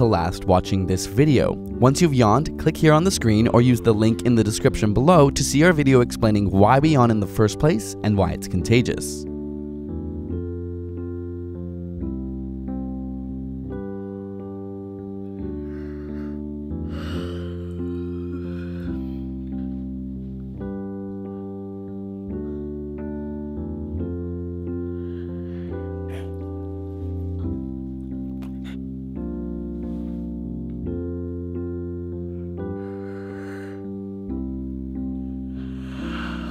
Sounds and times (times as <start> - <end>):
Music: 0.0 - 36.5.